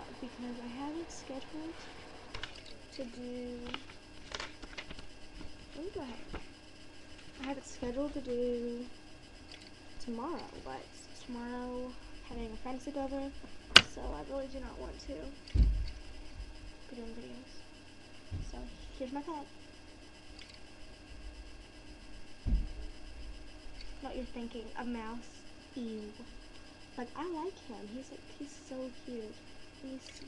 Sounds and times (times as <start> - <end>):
Speech: 0.0 - 1.9, 2.9 - 3.8, 5.8 - 6.3, 7.4 - 8.9, 10.0 - 15.4, 16.9 - 17.6, 18.4 - 19.5, 24.0 - 26.3, 27.0 - 30.2.